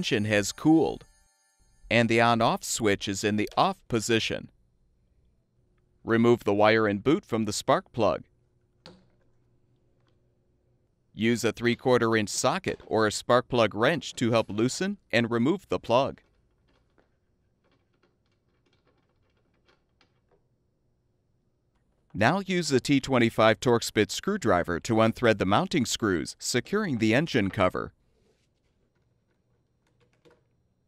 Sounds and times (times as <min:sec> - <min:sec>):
Speech: 0:00.0 - 0:01.0, 0:01.9 - 0:04.5, 0:06.1 - 0:08.3, 0:11.2 - 0:16.2, 0:22.2 - 0:27.9.